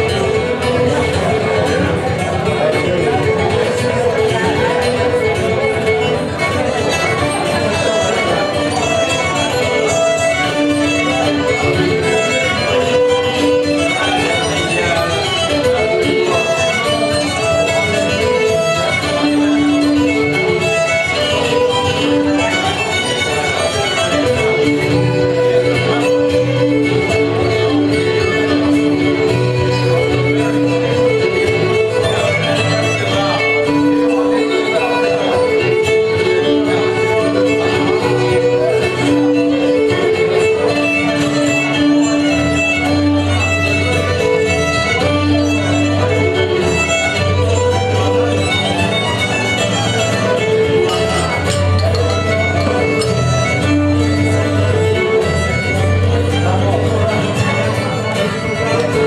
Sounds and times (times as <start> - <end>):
Violin, fiddle: 0.0 - 59.0.